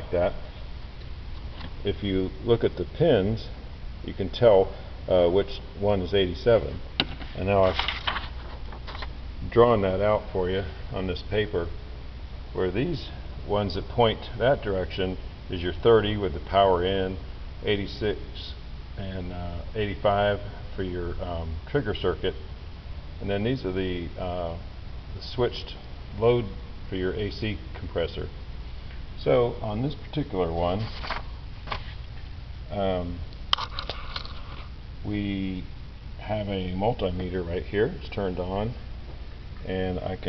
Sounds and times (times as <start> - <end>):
Speech: 0.0 - 0.5, 1.8 - 7.9, 9.4 - 11.8, 12.5 - 22.5, 23.2 - 28.4, 29.2 - 31.0, 32.7 - 33.3, 35.0 - 38.9, 39.6 - 40.2.